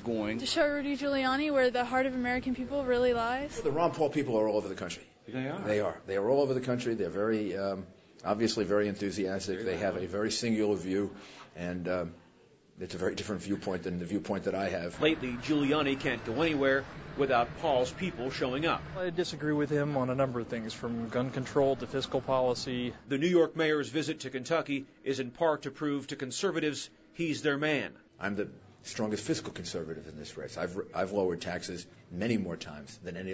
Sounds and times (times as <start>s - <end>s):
Speech: 12.8s - 33.3s.